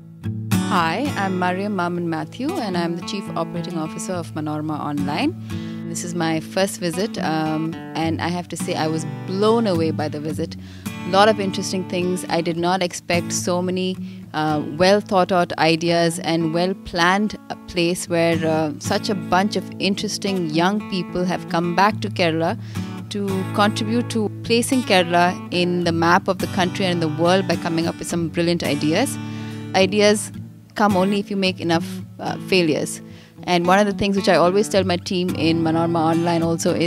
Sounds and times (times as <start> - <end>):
Music: 0.0 - 36.8
Speech: 0.7 - 5.3, 5.9 - 29.2, 29.8 - 36.8.